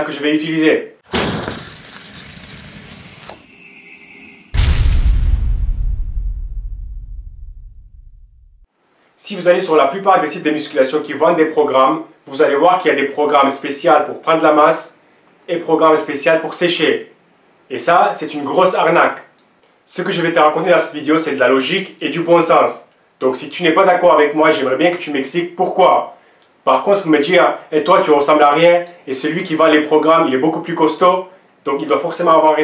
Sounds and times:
Speech: 0:00.0 - 0:01.0, 0:09.2 - 0:32.6.

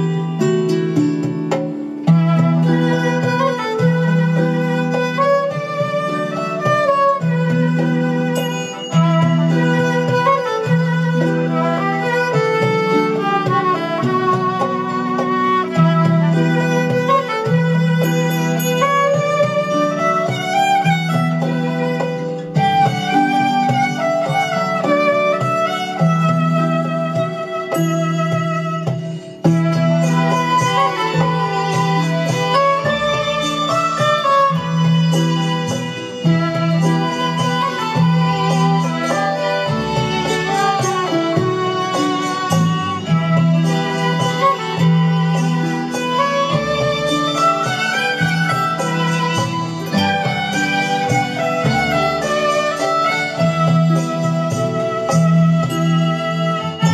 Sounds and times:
Violin, fiddle: 0:00.0 - 0:56.9.

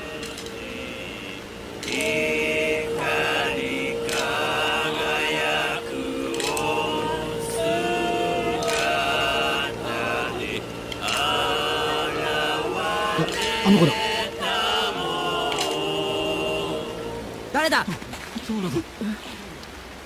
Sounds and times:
Speech: 0:13.2 - 0:14.0.

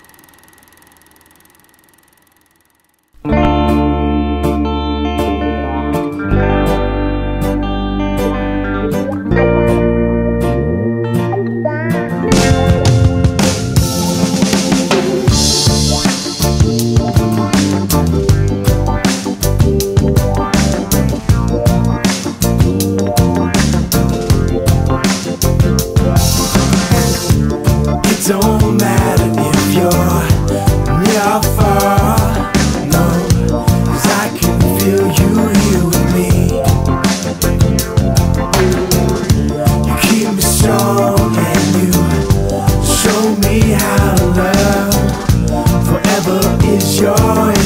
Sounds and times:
Guitar: 0:03.1 - 0:47.6.

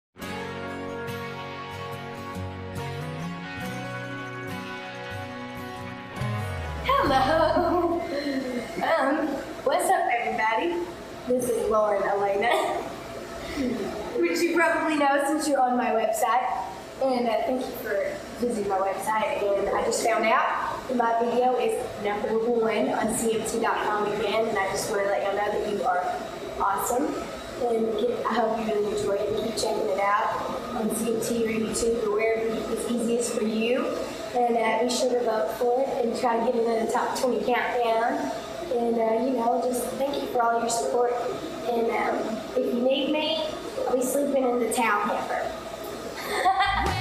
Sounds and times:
Speech: 0:08.8 - 0:12.8, 0:14.2 - 0:45.5.

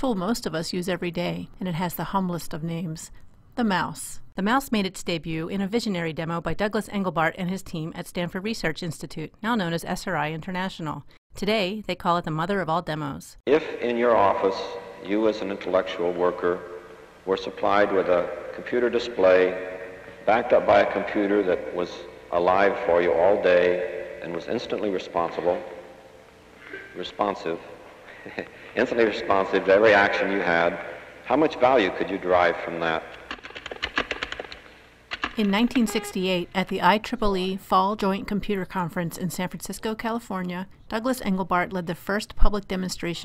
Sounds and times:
Speech: 0:00.0 - 0:16.6, 0:17.3 - 0:19.6, 0:20.3 - 0:25.6, 0:26.7 - 0:27.7, 0:28.3 - 0:33.0, 0:35.4 - 0:43.2.

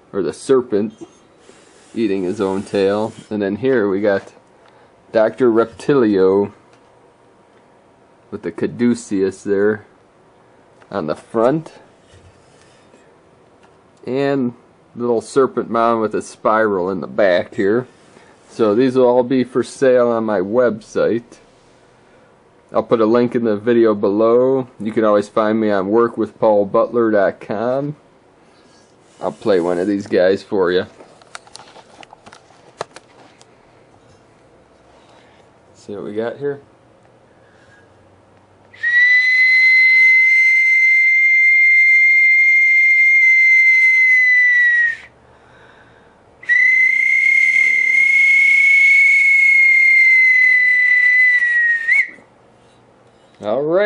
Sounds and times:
Whistling: 0:38.8 - 0:45.2, 0:46.4 - 0:52.3.

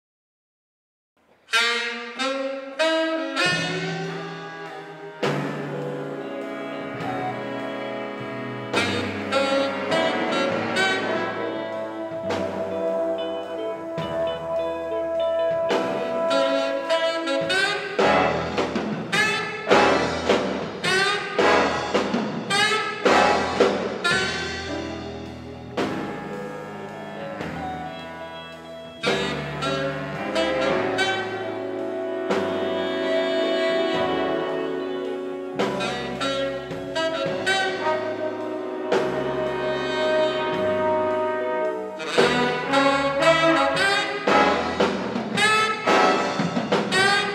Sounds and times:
Jazz: 0:01.3 - 0:47.3.

